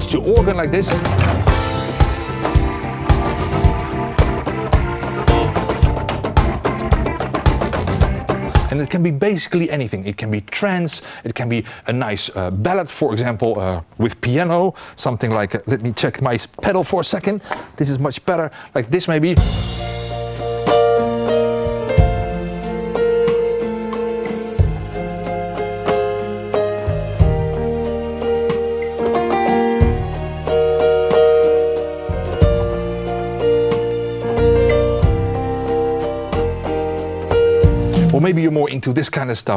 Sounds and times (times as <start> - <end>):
Electric piano: 0.0 - 8.7, 19.5 - 38.4.